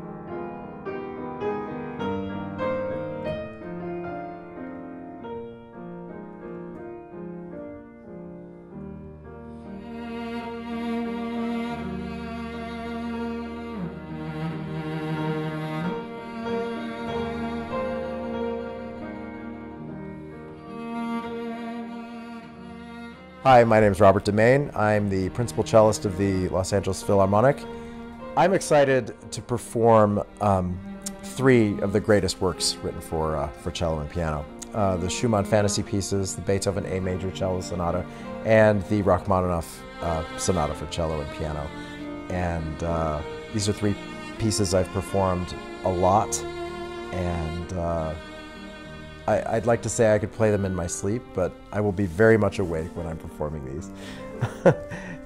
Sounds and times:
Musical instrument: 0.0s - 55.2s
Speech: 23.5s - 27.7s, 28.4s - 41.7s, 42.3s - 46.4s, 47.2s - 48.2s, 49.3s - 54.0s.

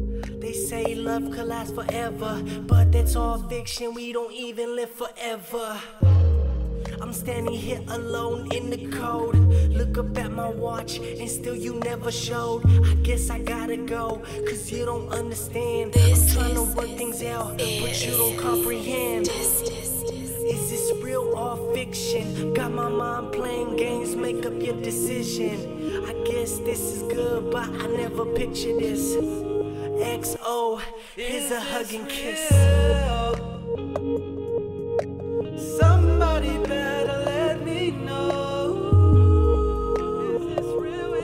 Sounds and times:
Independent music: 0.0s - 4.3s, 6.0s - 41.2s.

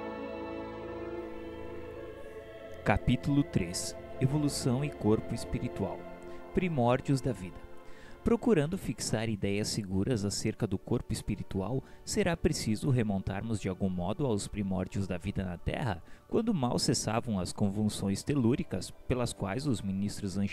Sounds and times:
Music: 0.0s - 20.5s
Speech: 2.8s - 6.0s, 6.6s - 7.6s, 8.2s - 20.5s.

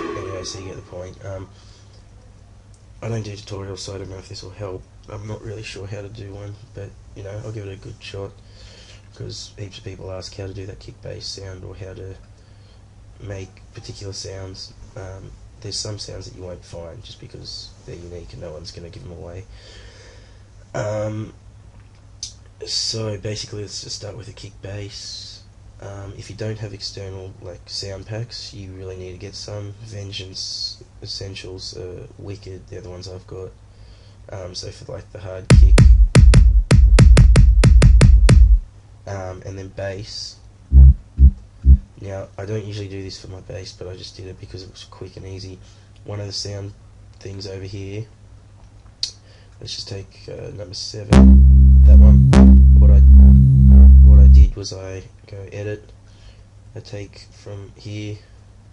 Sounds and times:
Speech: 0.0s - 2.4s, 3.0s - 12.3s, 13.2s - 19.6s, 20.7s - 21.4s, 22.2s - 33.6s, 34.3s - 35.8s, 39.0s - 41.0s, 41.7s - 48.2s, 49.0s - 56.0s, 56.7s - 58.3s.

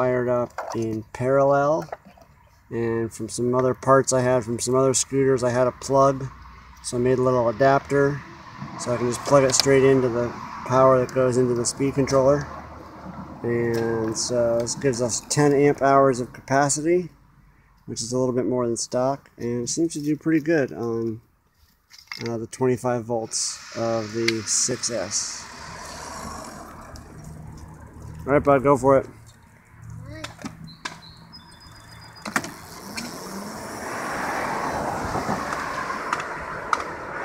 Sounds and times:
Speech: 0.0s - 1.9s, 2.7s - 6.3s, 6.9s - 8.2s, 8.8s - 12.5s, 13.4s - 17.1s, 17.9s - 21.2s, 22.2s - 25.5s, 28.2s - 29.2s.

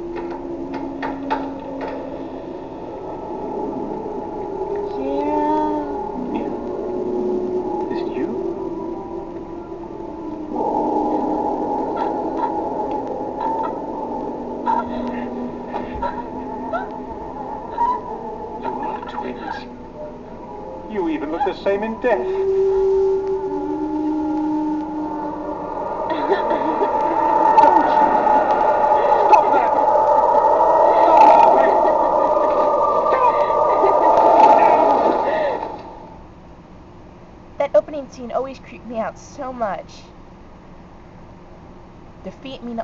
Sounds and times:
Music: 0.0s - 25.6s.

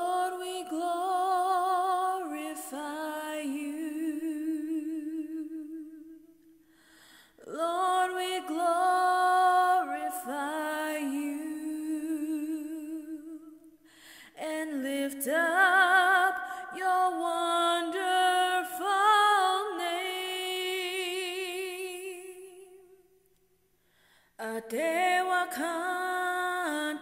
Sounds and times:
Female singing: 0.0s - 6.3s, 7.4s - 13.6s, 14.3s - 23.0s, 24.4s - 27.0s.

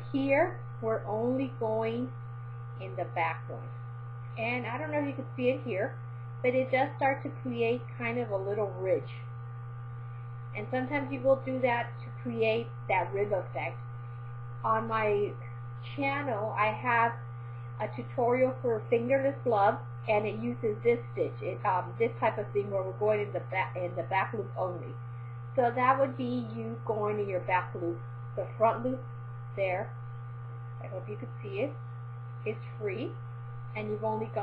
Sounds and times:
Speech: 0.0s - 2.1s, 2.8s - 3.8s, 4.4s - 9.2s, 10.6s - 13.8s, 14.6s - 17.2s, 17.8s - 25.0s, 25.6s - 29.0s, 29.6s - 30.0s, 30.8s - 31.8s, 32.5s - 33.2s, 33.8s - 34.4s.

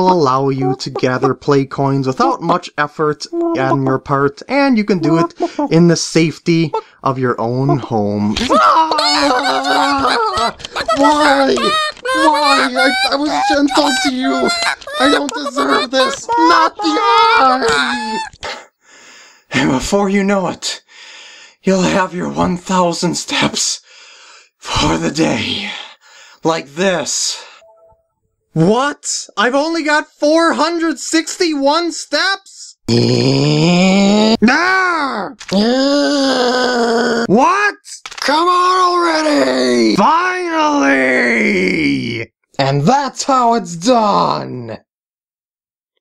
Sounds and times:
Speech: 0.0s - 18.3s, 19.5s - 20.9s, 21.6s - 23.8s, 24.6s - 27.6s, 28.6s - 44.9s
Groan: 8.4s - 15.2s, 32.9s - 37.3s.

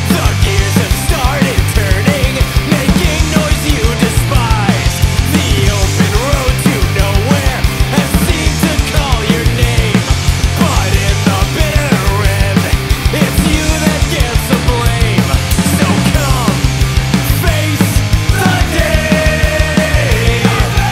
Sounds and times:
Music: 0.0s - 20.9s.

